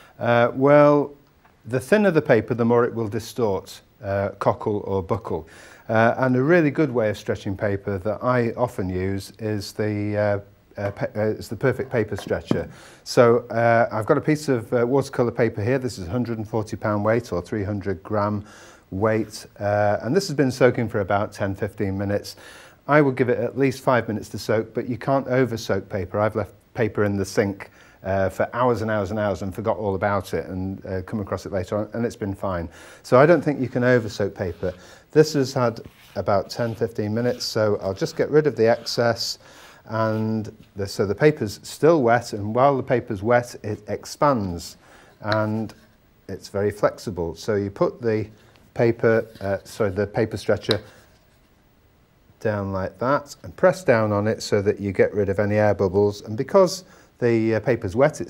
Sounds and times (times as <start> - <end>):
Speech: 0.2 - 50.9, 52.4 - 58.3.